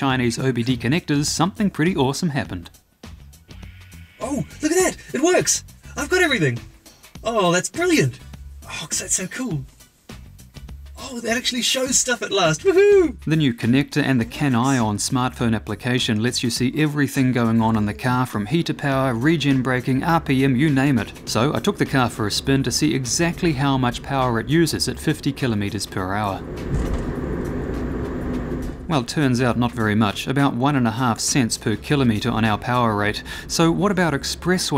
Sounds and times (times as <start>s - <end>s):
Speech: 0.0s - 2.7s, 4.2s - 9.7s, 11.0s - 26.4s, 28.9s - 34.7s
Music: 0.0s - 34.7s.